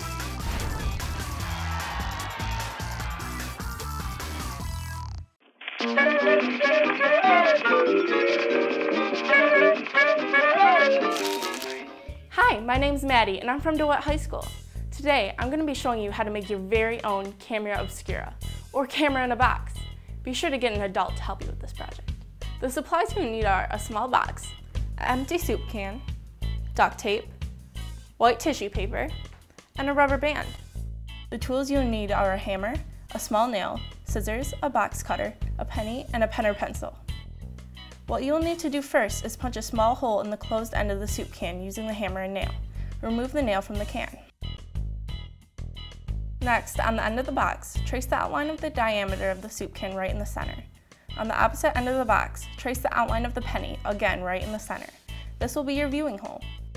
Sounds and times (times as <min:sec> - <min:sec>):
Music: 0:00.0 - 0:56.7
Speech: 0:12.3 - 0:22.0, 0:22.6 - 0:26.1, 0:26.8 - 0:27.3, 0:28.2 - 0:29.2, 0:29.8 - 0:30.6, 0:31.3 - 0:37.0, 0:38.1 - 0:44.3, 0:46.4 - 0:56.5.